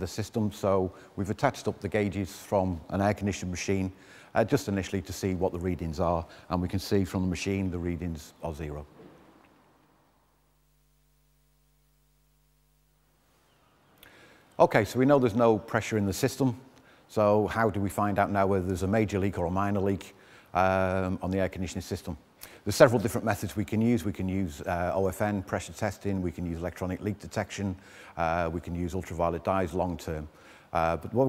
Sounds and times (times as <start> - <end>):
Speech: 0.0 - 8.9, 14.6 - 31.2.